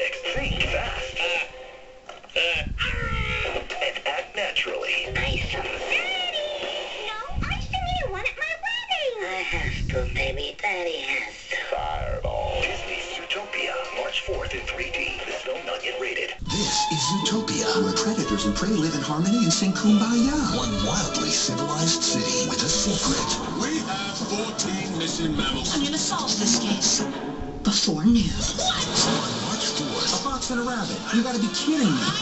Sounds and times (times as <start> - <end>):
Television: 0.0 - 32.2
Speech: 2.4 - 29.0.